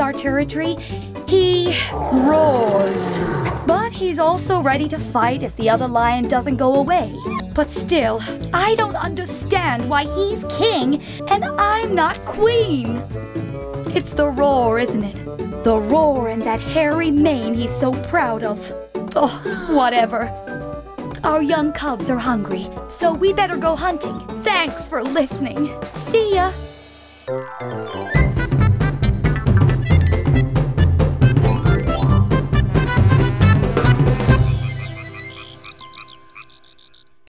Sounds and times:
Speech: 0.0s - 13.0s, 13.9s - 20.3s, 21.2s - 26.6s
Music: 0.0s - 37.3s.

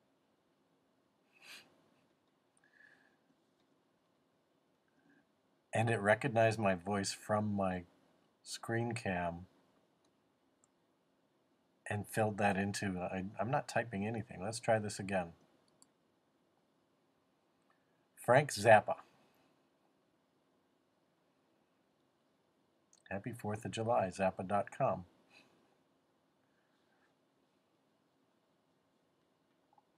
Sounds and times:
Male speech, man speaking: 5.8s - 7.9s, 8.5s - 9.5s, 11.9s - 15.4s, 18.2s - 19.0s, 23.1s - 25.0s.

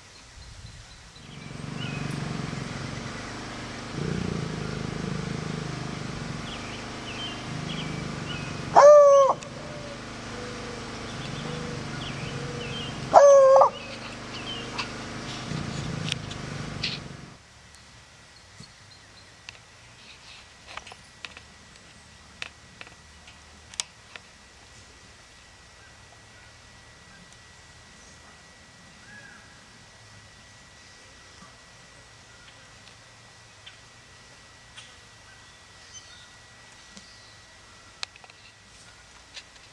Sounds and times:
Roaring cats (lions, tigers): 1.2s - 3.2s, 3.9s - 10.5s, 15.3s - 17.2s.

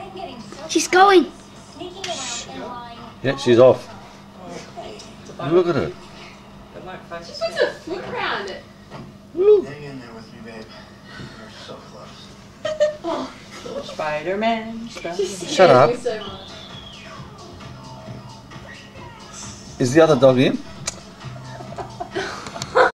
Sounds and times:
Music: 15.1s - 22.9s.

